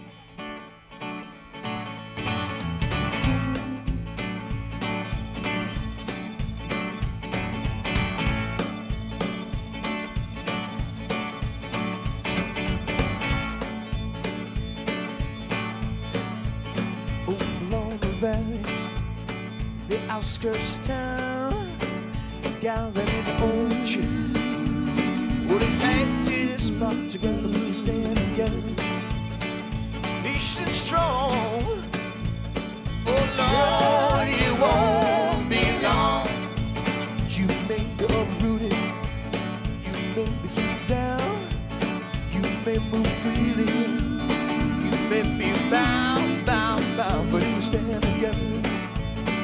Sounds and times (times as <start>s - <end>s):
Music: 0.0s - 49.4s.